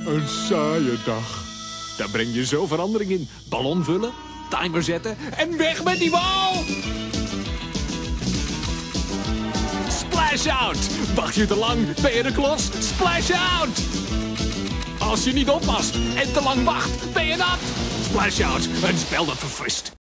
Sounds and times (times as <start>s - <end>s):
Music: 0.0s - 19.7s
Speech: 2.0s - 6.6s, 15.0s - 20.0s.